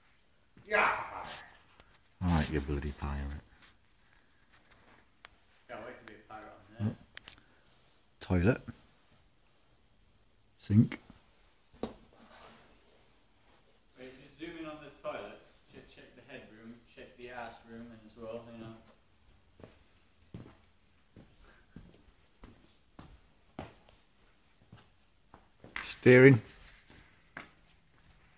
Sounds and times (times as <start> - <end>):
Speech: 2.2 - 3.5, 5.7 - 7.0, 8.2 - 8.8, 10.6 - 11.1, 14.0 - 19.0, 25.8 - 26.5.